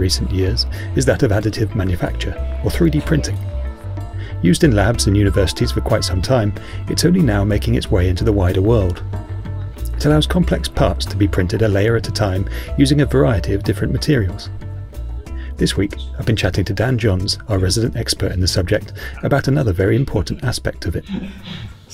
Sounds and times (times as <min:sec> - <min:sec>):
Speech: 0:00.0 - 0:03.4, 0:04.4 - 0:09.0, 0:09.9 - 0:14.5, 0:15.6 - 0:21.3
Music: 0:00.0 - 0:21.9.